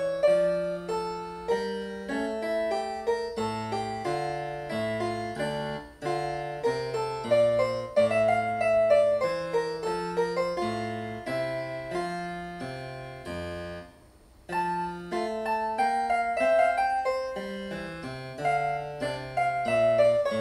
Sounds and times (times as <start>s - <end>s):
Harpsichord: 0.0s - 13.9s, 14.5s - 20.4s
Piano: 0.0s - 20.4s.